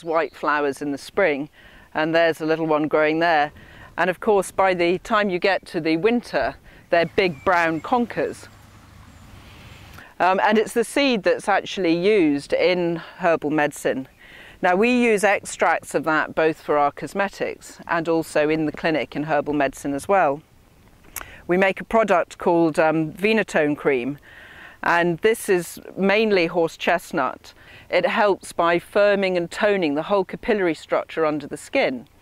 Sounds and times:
Speech: 0.0 - 8.5, 10.2 - 20.4, 21.5 - 24.2, 24.8 - 32.1.

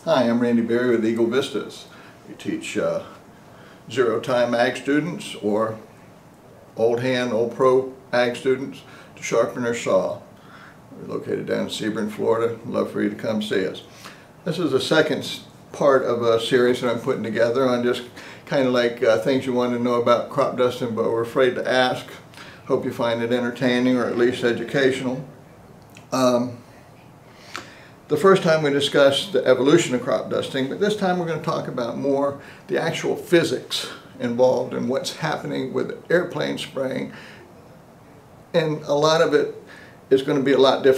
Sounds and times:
Speech: 0.0 - 3.2, 3.9 - 5.9, 6.8 - 10.3, 10.9 - 25.3, 26.0 - 26.7, 28.1 - 37.2, 38.5 - 40.9.

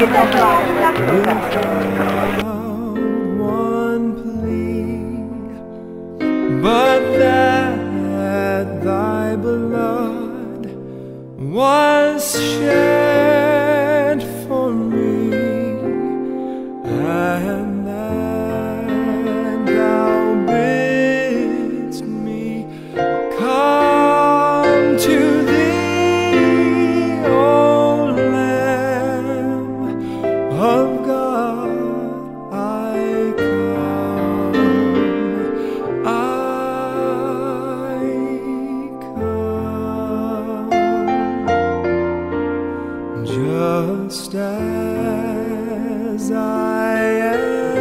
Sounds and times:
Speech: 0.0 - 2.8
Music: 0.0 - 47.8.

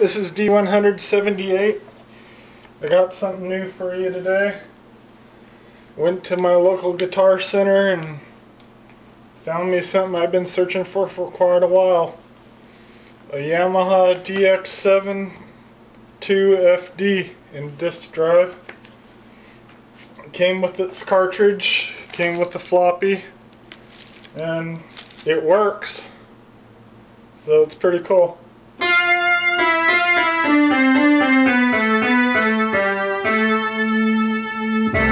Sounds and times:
Speech: 0.0 - 1.8, 2.8 - 4.7, 6.0 - 8.3, 9.4 - 12.2, 13.3 - 15.5, 16.2 - 18.7, 20.2 - 23.4, 24.4 - 26.2, 27.4 - 28.5
Musical instrument: 28.8 - 35.1.

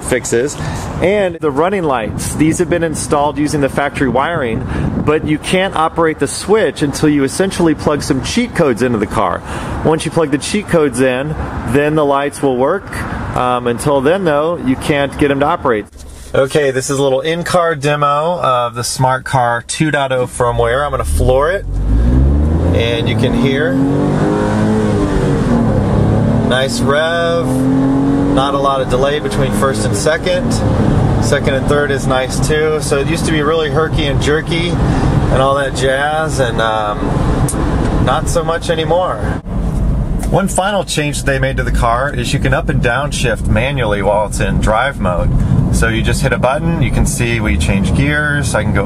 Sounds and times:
Speech: 0.0 - 21.7, 22.8 - 23.8, 26.5 - 27.6, 28.4 - 30.6, 31.2 - 37.0, 38.1 - 39.4, 40.2 - 48.8.

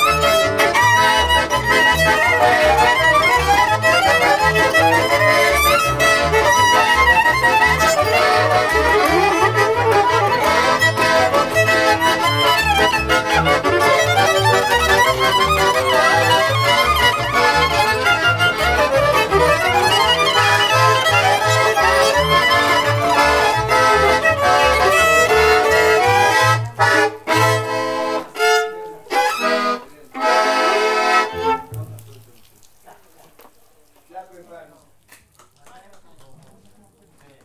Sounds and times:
Accordion: 0.0 - 31.7
Speech: 31.6 - 35.0, 35.6 - 37.4.

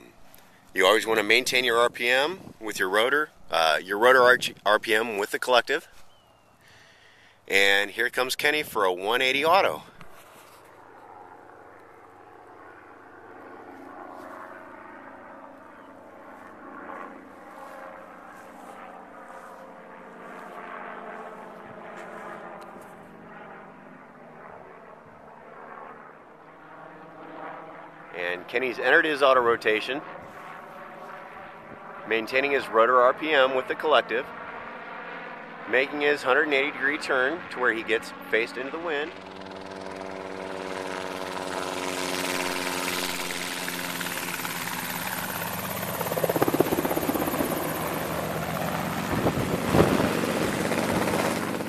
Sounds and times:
Speech: 0.8 - 5.9, 7.5 - 9.9, 28.2 - 30.0, 32.1 - 34.3, 35.7 - 39.2.

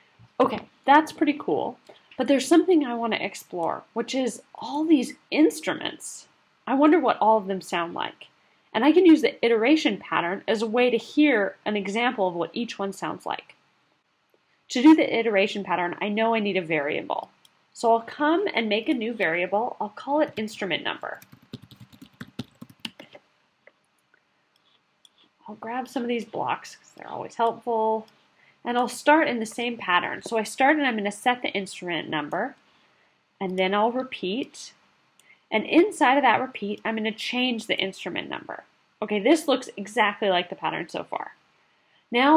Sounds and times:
Speech: 0.4 - 13.5, 14.7 - 21.2, 25.5 - 32.6, 33.4 - 34.8, 35.5 - 41.4, 42.1 - 42.3.

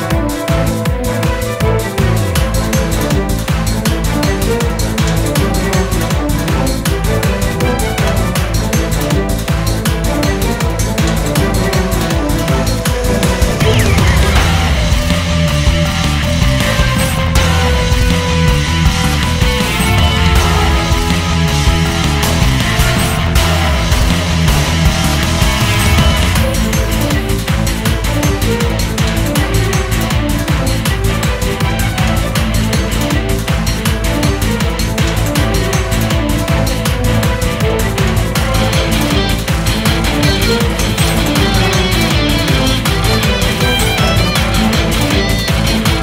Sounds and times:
Music: 0.0 - 46.0.

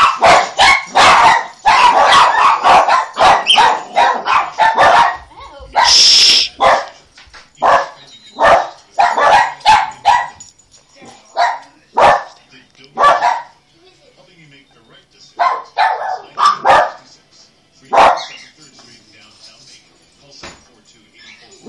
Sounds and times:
Bow-wow: 0.0 - 5.2, 5.8 - 7.0, 7.6 - 10.4, 11.3 - 12.4, 13.0 - 13.6, 15.4 - 17.0, 17.9 - 18.4
Bark: 0.0 - 7.0, 7.6 - 12.4, 13.0 - 13.6, 15.4 - 17.1, 17.9 - 18.4
Canidae, dogs, wolves: 0.0 - 13.7, 15.3 - 17.2, 17.8 - 18.8, 21.1 - 21.6.

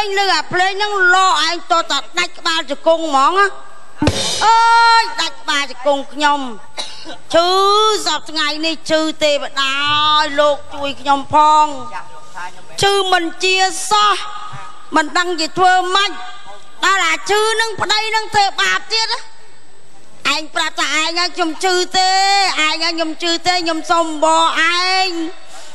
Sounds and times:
Speech: 0.0 - 19.3, 20.0 - 25.7.

